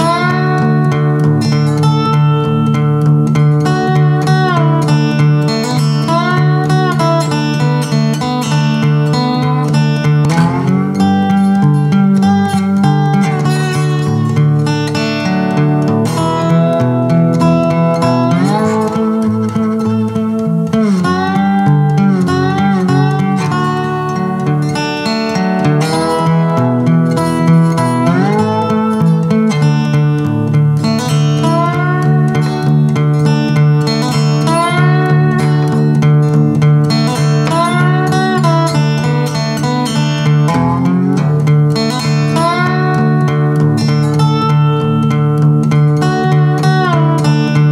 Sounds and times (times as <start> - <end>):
Guitar: 0.0 - 47.7.